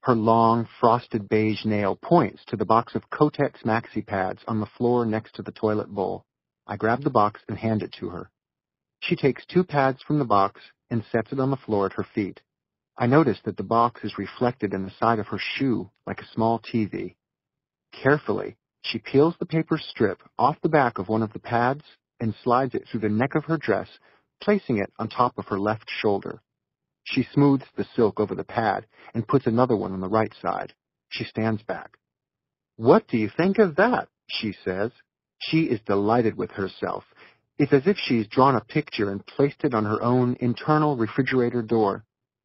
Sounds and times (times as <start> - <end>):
Speech synthesizer: 0.1 - 8.3, 9.0 - 12.4, 13.0 - 17.1, 18.0 - 26.4, 27.1 - 31.9, 32.8 - 42.0.